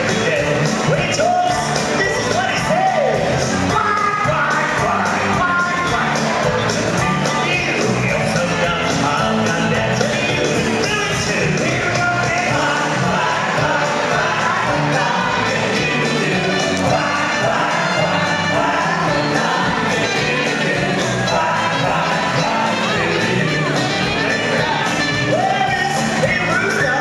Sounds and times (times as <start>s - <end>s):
Music: 0.0s - 27.0s.